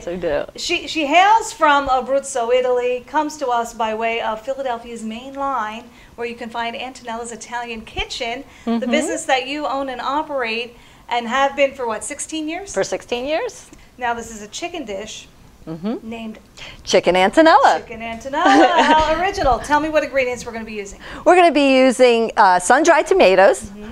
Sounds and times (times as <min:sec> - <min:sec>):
Speech: 0:00.0 - 0:23.9.